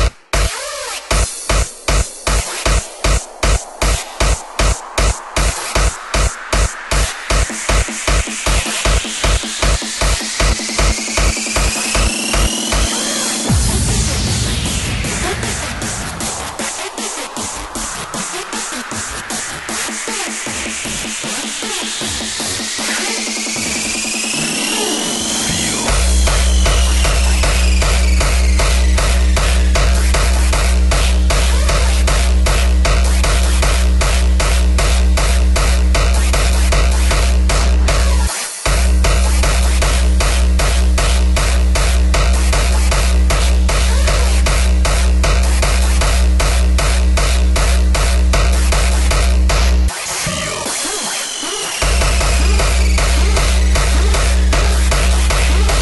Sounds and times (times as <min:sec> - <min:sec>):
Techno: 0:00.0 - 0:55.8.